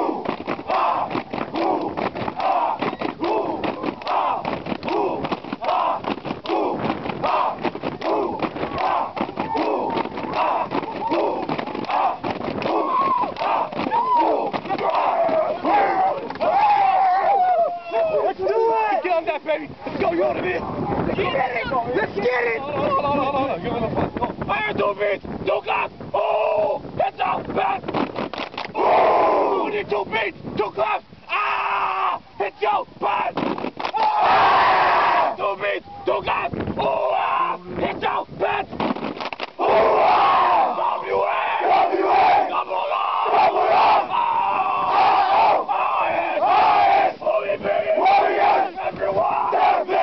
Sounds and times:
Speech: 16.9s - 27.8s, 29.6s - 31.1s, 32.0s - 33.4s.

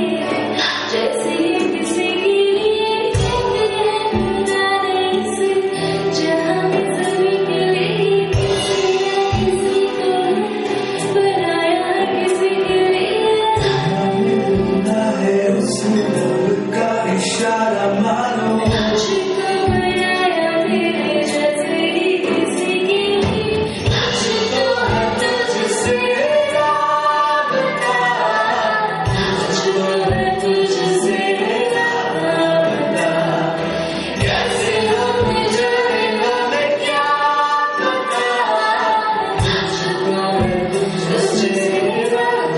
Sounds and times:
Female singing: 0.0s - 42.5s
Music: 0.0s - 42.5s.

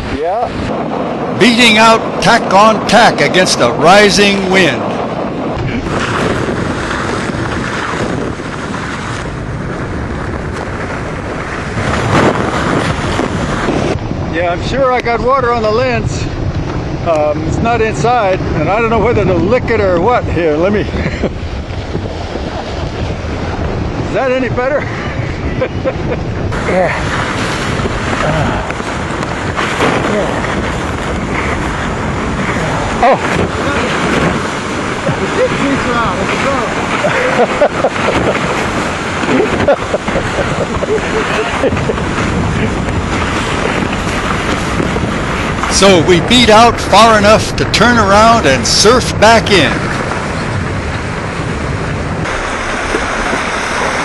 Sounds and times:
Sailboat, sailing ship: 0.0s - 54.0s
Wind: 0.0s - 54.0s.

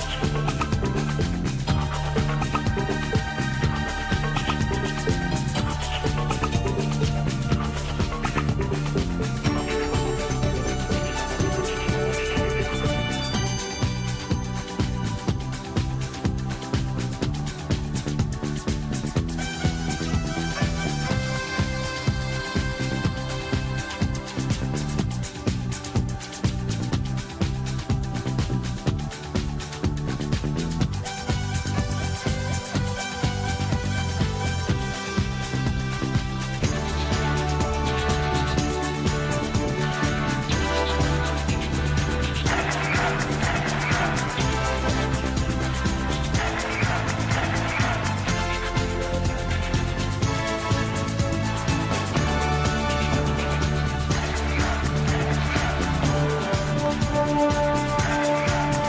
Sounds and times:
Theme music: 0.0s - 58.8s.

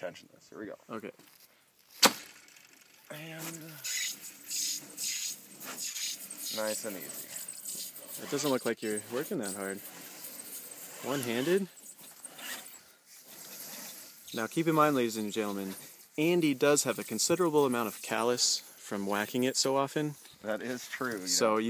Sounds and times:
Pulleys: 2.0s - 18.4s.

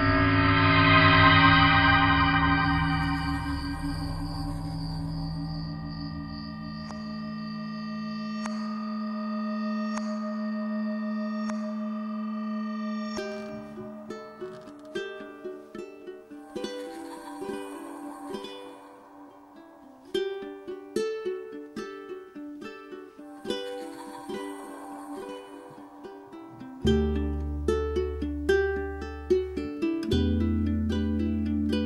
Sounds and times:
New-age music: 0.0s - 31.8s.

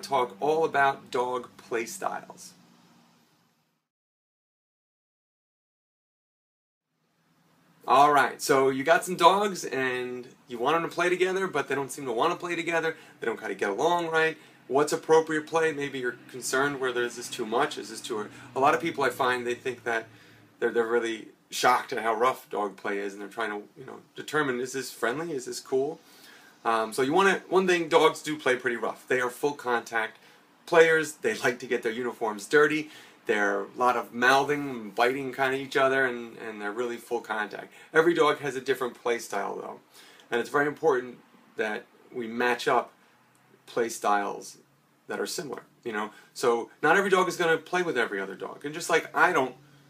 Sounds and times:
Speech: 0.0s - 2.6s, 7.8s - 26.0s, 26.6s - 43.0s, 43.6s - 49.6s.

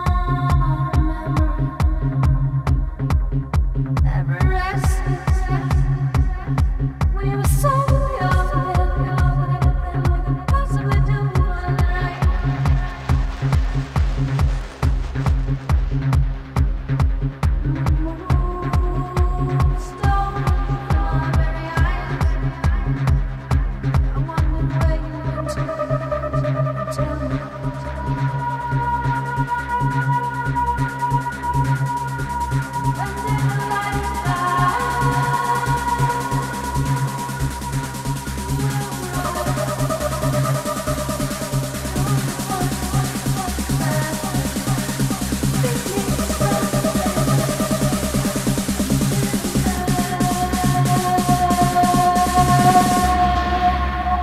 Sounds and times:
Music: 0.0s - 54.2s.

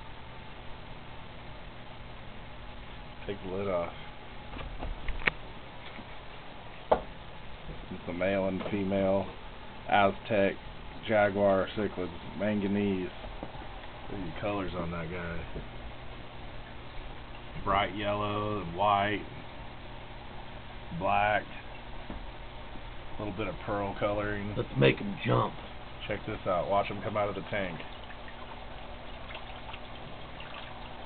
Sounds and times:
Speech: 3.2s - 4.0s, 7.9s - 13.2s, 14.1s - 15.5s, 17.6s - 19.4s, 20.9s - 21.6s, 23.2s - 27.9s.

